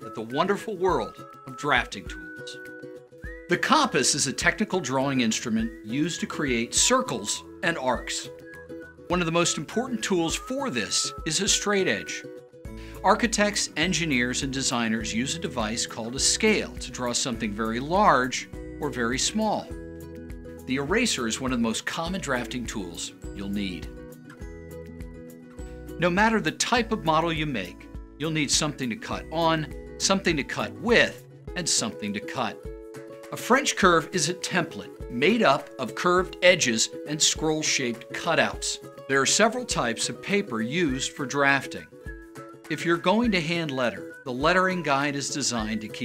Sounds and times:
Speech: 0:00.0 - 0:02.6, 0:03.5 - 0:08.3, 0:09.1 - 0:12.2, 0:13.0 - 0:19.7, 0:20.7 - 0:23.9, 0:26.0 - 0:32.6, 0:33.4 - 0:41.9, 0:42.7 - 0:46.0
Music: 0:00.0 - 0:46.0.

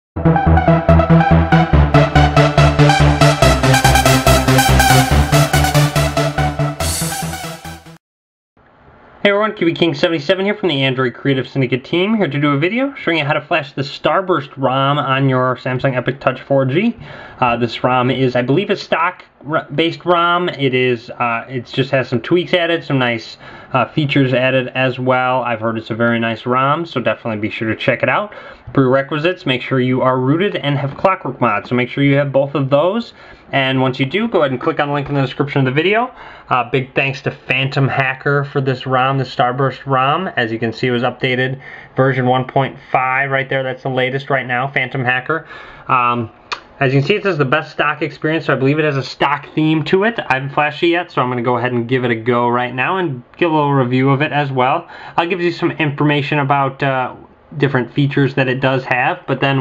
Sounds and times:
Techno: 0:00.2 - 0:08.0
Speech: 0:09.2 - 0:59.6.

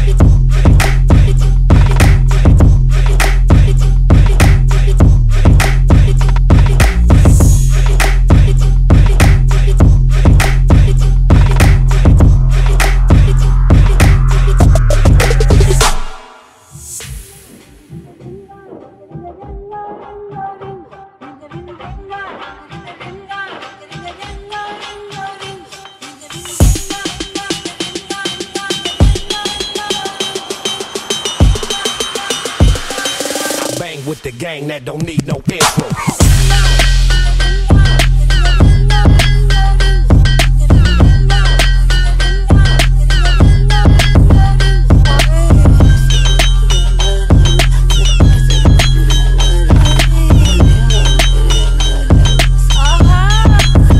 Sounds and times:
Music: 0:00.0 - 0:53.9.

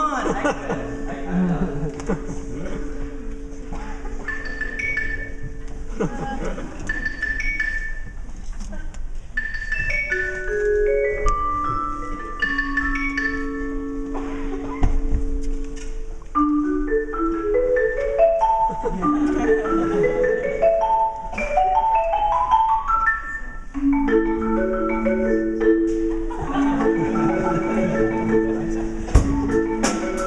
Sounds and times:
Marimba, xylophone: 0:00.0 - 0:08.4, 0:09.2 - 0:30.2
Glockenspiel: 0:00.9 - 0:08.2, 0:09.4 - 0:30.2.

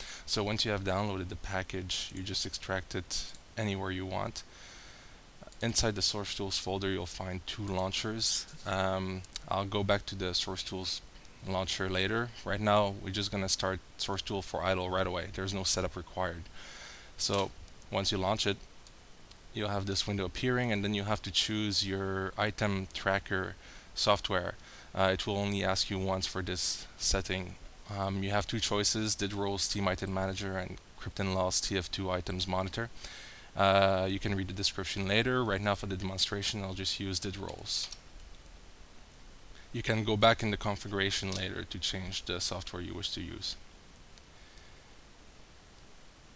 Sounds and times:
Speech: 0:00.3 - 0:04.5, 0:05.5 - 0:16.5, 0:17.2 - 0:18.6, 0:19.6 - 0:32.9, 0:33.6 - 0:38.0, 0:39.7 - 0:43.6.

